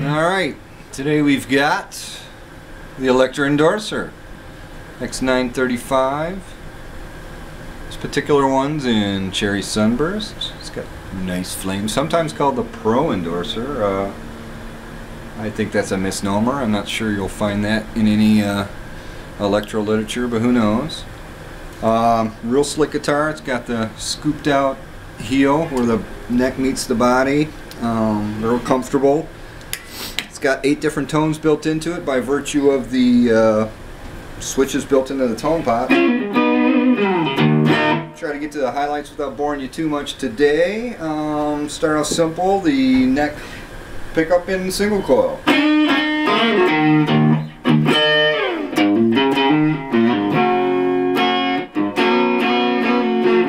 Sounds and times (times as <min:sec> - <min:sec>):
Speech: 0:00.0 - 0:02.4, 0:03.0 - 0:04.2, 0:05.0 - 0:06.6, 0:07.9 - 0:14.2, 0:15.4 - 0:18.8, 0:19.4 - 0:21.1, 0:21.8 - 0:29.4, 0:30.3 - 0:33.8, 0:34.4 - 0:36.0, 0:38.2 - 0:43.4, 0:44.1 - 0:45.5.